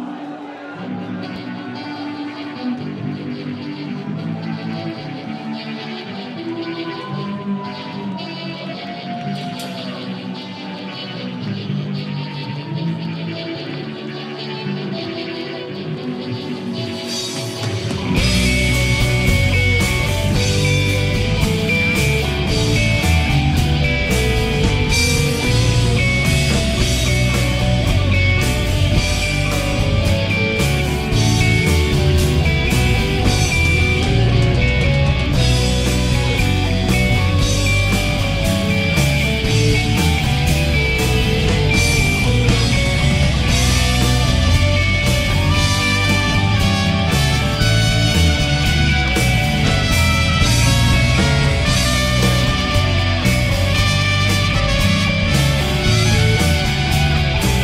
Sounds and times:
Guitar: 0.0s - 57.6s
Progressive rock: 0.0s - 57.6s.

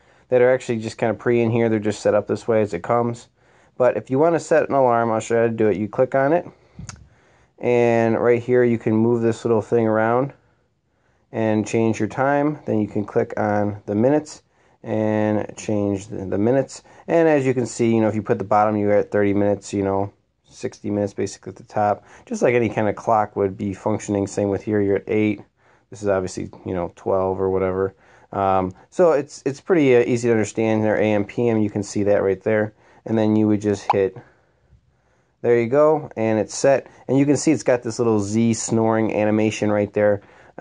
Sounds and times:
Speech: 0.3s - 10.4s, 11.3s - 34.4s, 35.4s - 40.6s.

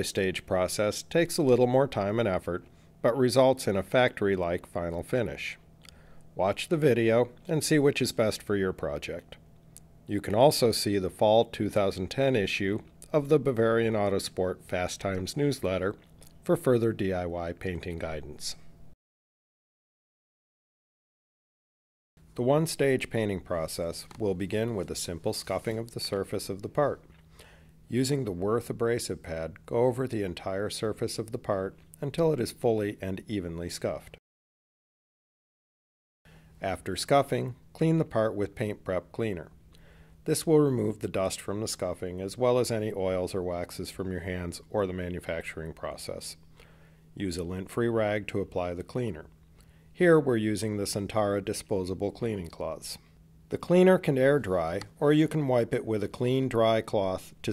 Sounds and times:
Speech: 0.0s - 5.6s, 6.4s - 9.4s, 10.1s - 18.7s, 22.4s - 27.1s, 27.9s - 34.2s, 36.6s - 39.6s, 40.2s - 46.4s, 47.2s - 49.4s, 50.0s - 57.5s.

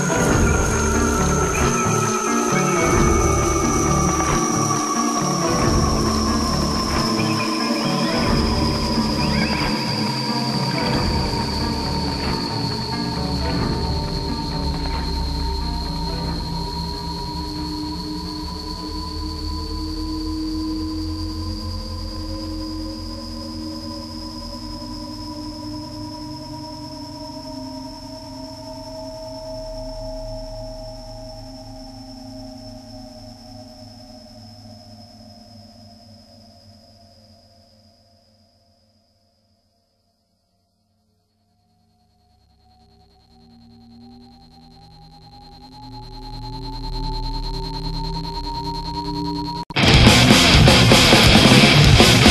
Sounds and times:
Music: 0.0s - 52.3s.

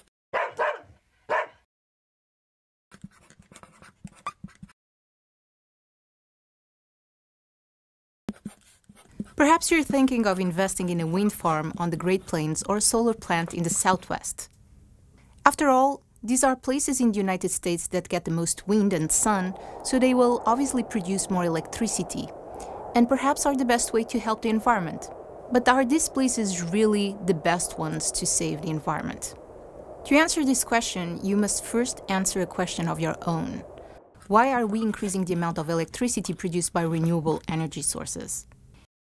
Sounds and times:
Speech: 9.2s - 14.5s, 15.4s - 22.3s, 23.0s - 29.4s, 30.1s - 33.7s, 34.3s - 38.5s.

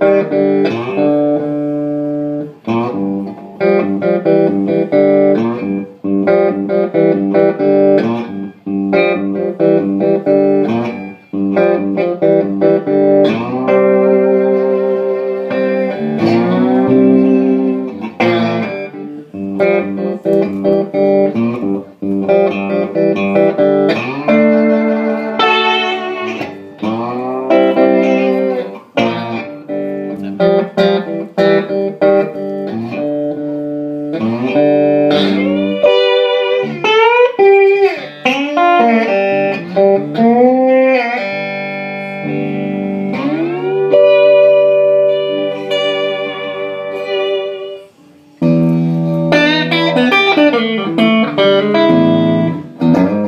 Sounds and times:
Strum: 0.0s - 53.2s.

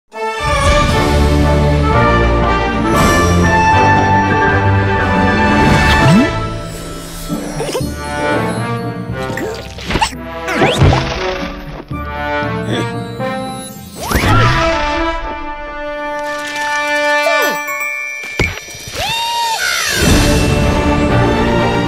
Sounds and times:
Music: 0.1s - 21.8s.

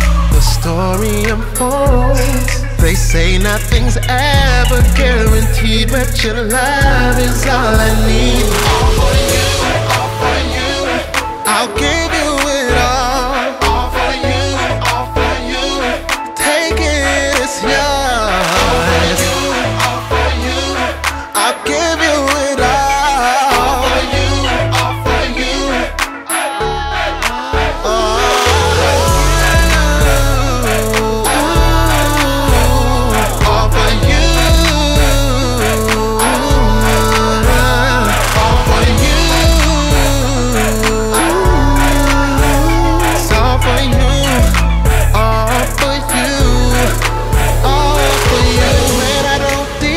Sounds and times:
Gospel music: 0.0s - 49.9s
Rhythm and blues: 0.0s - 49.9s
Singing: 0.0s - 49.9s
Song: 0.0s - 49.9s.

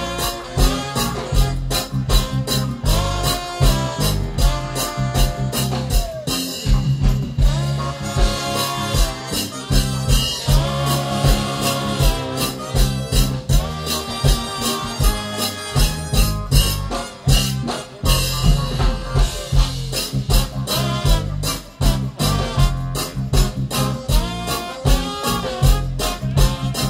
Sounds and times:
Blues: 0.0s - 26.9s
Ska: 0.0s - 26.9s.

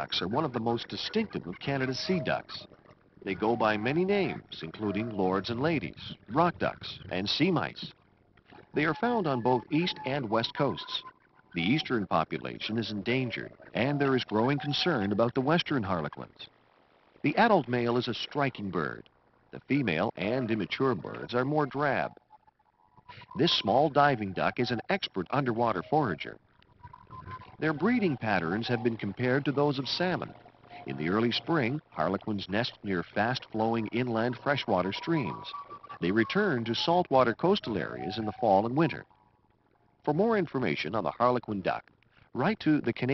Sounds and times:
Speech: 0.0s - 7.9s, 8.8s - 11.0s, 11.6s - 16.5s, 17.3s - 19.0s, 19.6s - 22.1s, 23.2s - 26.4s, 27.6s - 39.1s, 40.1s - 41.8s, 42.4s - 43.1s.

